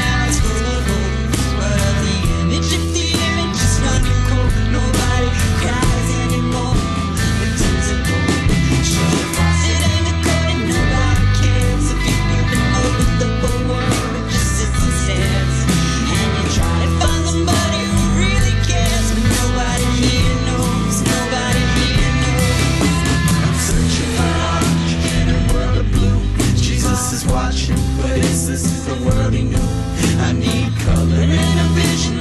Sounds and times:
Psychedelic rock: 0:00.0 - 0:32.2.

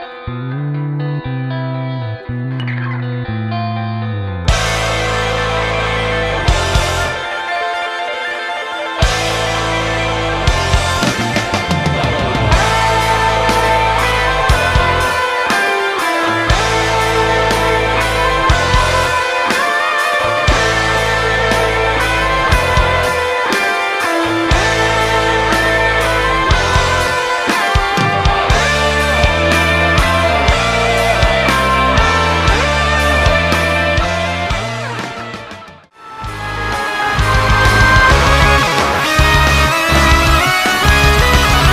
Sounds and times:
Bass guitar: 0:00.0 - 0:07.5, 0:09.0 - 0:41.7.

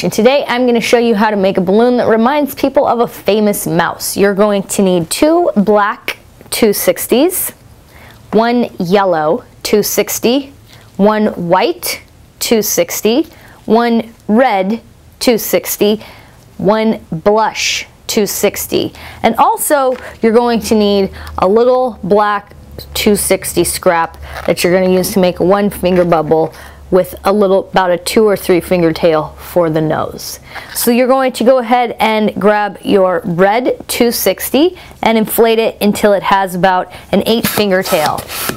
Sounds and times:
Speech: 0:00.0 - 0:07.6, 0:08.3 - 0:16.0, 0:16.6 - 0:38.3.

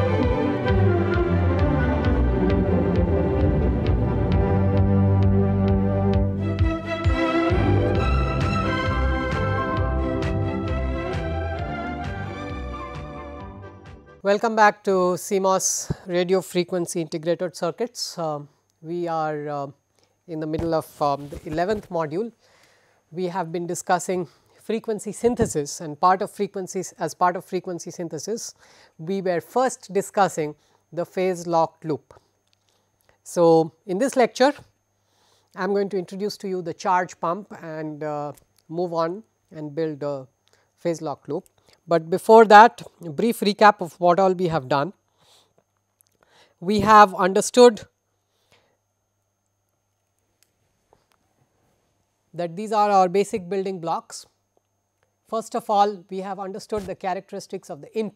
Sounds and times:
Speech: 0:14.2 - 0:22.4, 0:23.2 - 0:32.1, 0:33.3 - 0:34.7, 0:35.6 - 0:45.0, 0:46.6 - 0:47.9, 0:52.4 - 0:54.4, 0:55.3 - 0:58.1.

